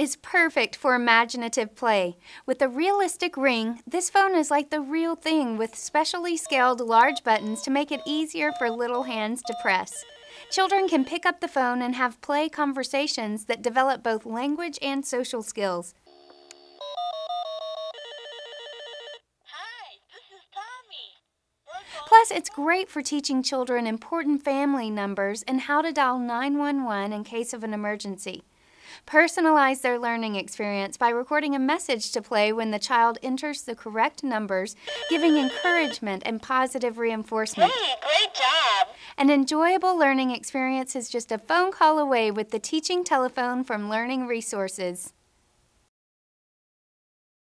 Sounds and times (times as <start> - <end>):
Speech: 0.0 - 10.0, 10.6 - 16.0, 19.5 - 28.4, 29.1 - 45.2
Telephone bell ringing: 6.5 - 11.0, 16.1 - 19.2, 34.9 - 36.0.